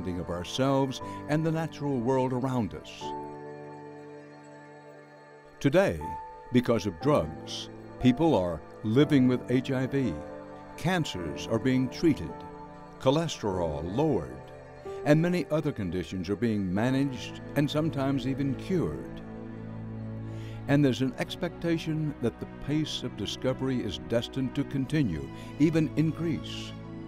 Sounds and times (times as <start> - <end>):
Speech: 0.0 - 3.1, 5.6 - 10.2, 10.8 - 12.4, 13.0 - 14.4, 15.1 - 19.2, 20.7 - 26.7
Music: 0.0 - 27.0.